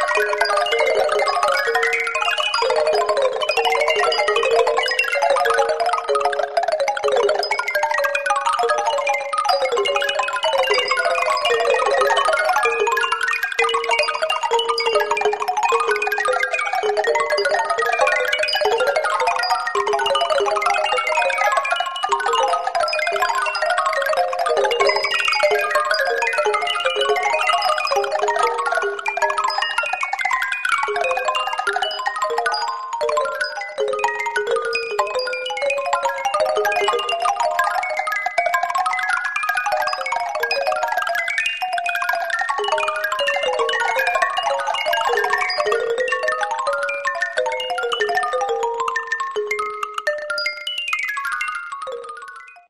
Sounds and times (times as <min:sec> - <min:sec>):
Jingle (music): 0:00.0 - 0:52.7.